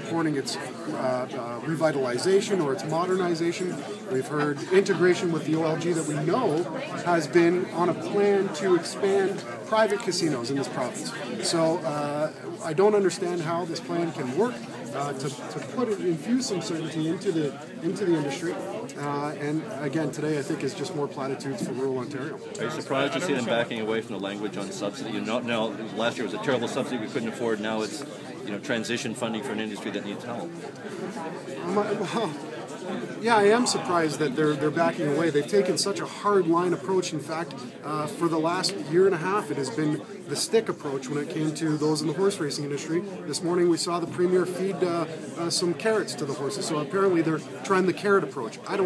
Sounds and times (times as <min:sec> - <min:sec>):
Speech: 0:00.0 - 0:48.8.